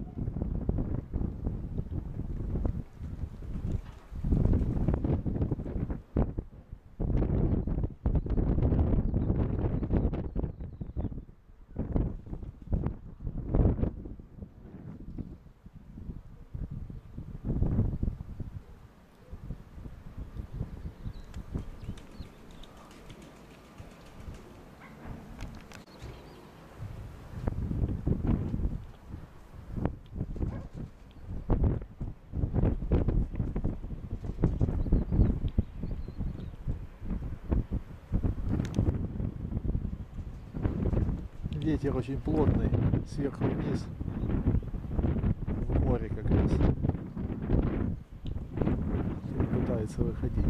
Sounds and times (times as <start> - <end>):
Outside, rural or natural: 0.0 - 50.4.